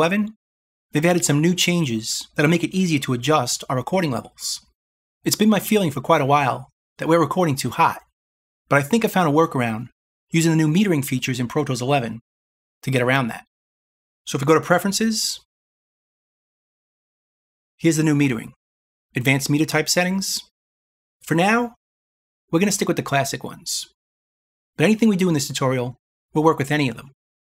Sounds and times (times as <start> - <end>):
Speech: 0.0 - 8.1, 8.7 - 12.2, 12.8 - 13.5, 14.3 - 15.5, 17.8 - 18.6, 19.2 - 20.5, 21.2 - 21.8, 22.6 - 24.0, 24.8 - 27.2.